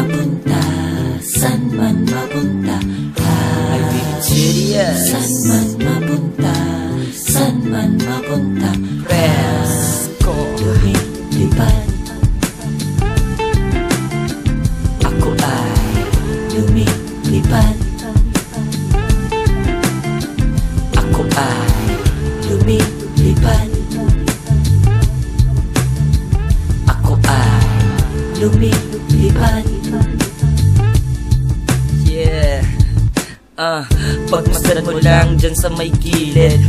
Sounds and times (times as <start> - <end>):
Music: 0.0 - 36.6.